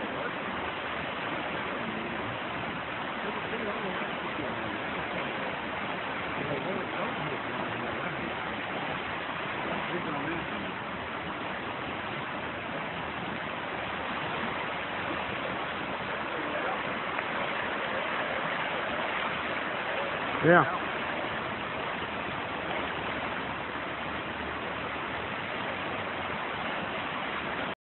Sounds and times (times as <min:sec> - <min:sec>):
Waterfall: 0:00.0 - 0:27.8
Speech: 0:03.2 - 0:04.9, 0:06.4 - 0:08.4, 0:09.7 - 0:10.7, 0:16.3 - 0:16.9, 0:20.4 - 0:20.8.